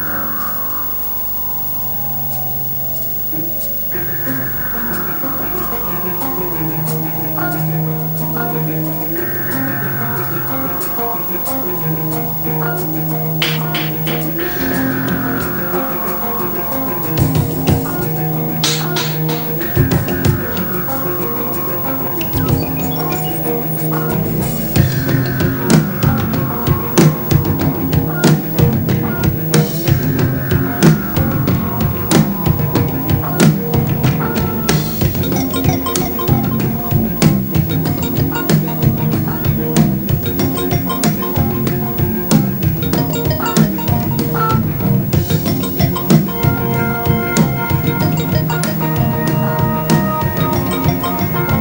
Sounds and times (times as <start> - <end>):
Music: 0.0 - 51.6.